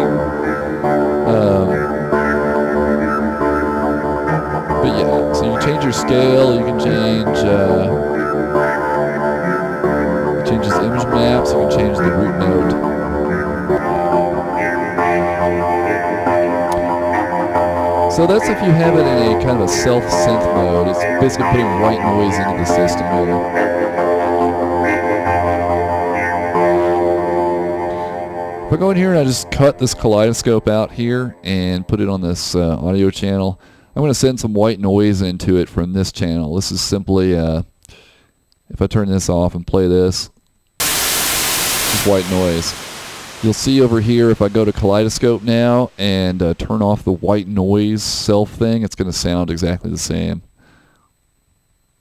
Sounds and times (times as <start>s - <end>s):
Music: 0.0s - 32.5s
Speech: 1.3s - 1.9s, 4.8s - 8.0s, 10.5s - 12.8s, 18.1s - 23.4s, 28.7s - 37.7s, 38.7s - 40.4s, 41.9s - 42.8s, 43.4s - 50.5s.